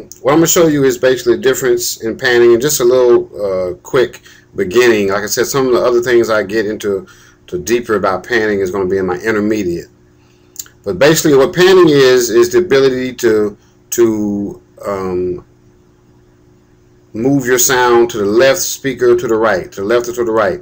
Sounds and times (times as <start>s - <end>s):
Speech: 0.0s - 9.9s, 10.6s - 15.5s, 17.1s - 20.6s.